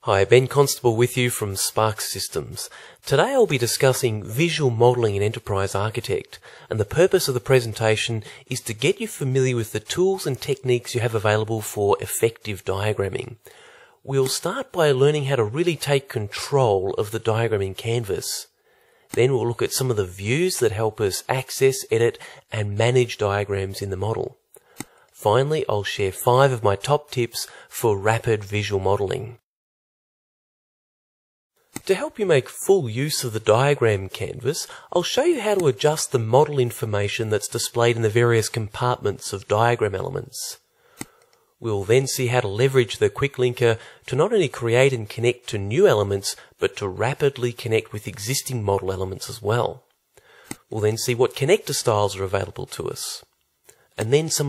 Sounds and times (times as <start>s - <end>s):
Speech: 0.0s - 13.4s, 14.0s - 18.5s, 19.1s - 24.4s, 25.2s - 29.4s, 31.8s - 40.6s, 41.6s - 49.9s, 50.7s - 53.4s, 54.0s - 54.4s.